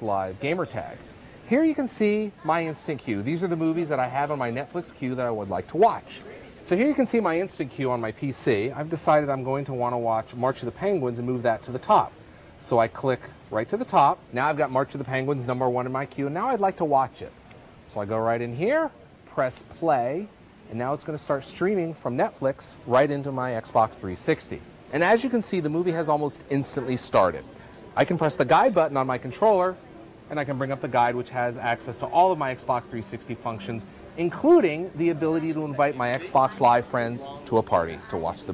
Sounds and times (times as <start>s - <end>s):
Speech: 0.0s - 38.5s.